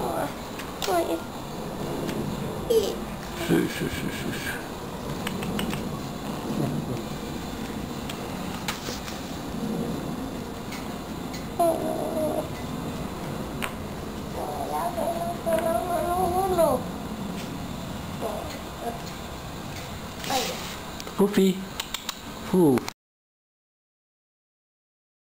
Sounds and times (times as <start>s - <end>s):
Speech: 21.2s - 21.7s, 22.5s - 22.9s.